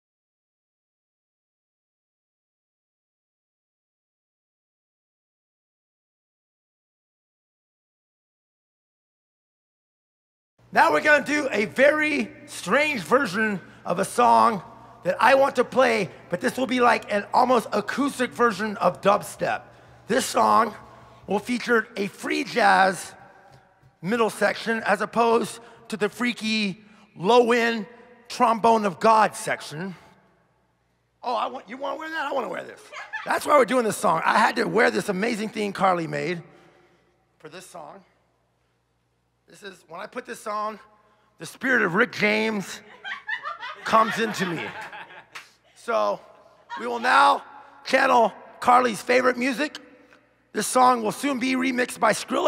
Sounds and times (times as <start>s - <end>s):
Speech: 10.7s - 23.2s, 24.0s - 30.0s, 31.2s - 36.4s, 37.4s - 38.2s, 39.5s - 42.9s, 43.9s - 44.9s, 45.8s - 49.8s, 50.5s - 52.4s.